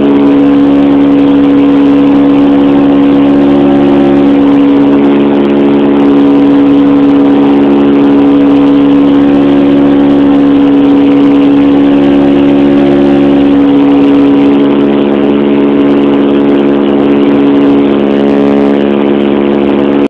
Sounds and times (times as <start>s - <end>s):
Aircraft: 0.0s - 20.0s.